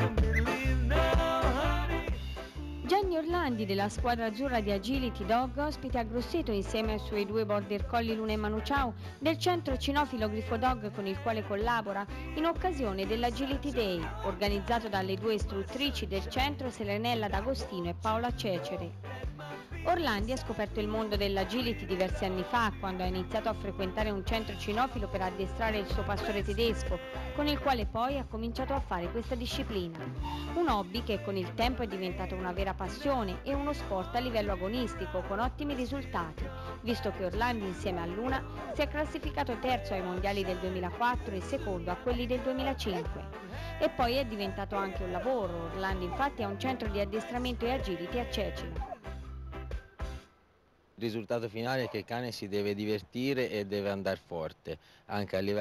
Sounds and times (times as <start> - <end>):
Music: 0.0 - 50.4
Speech: 2.9 - 18.9, 19.9 - 48.8, 51.0 - 55.6.